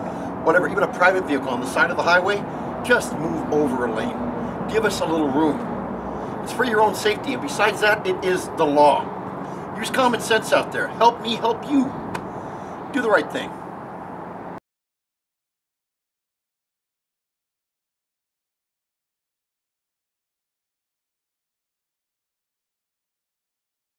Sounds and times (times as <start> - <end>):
Vehicle: 0.0 - 14.6.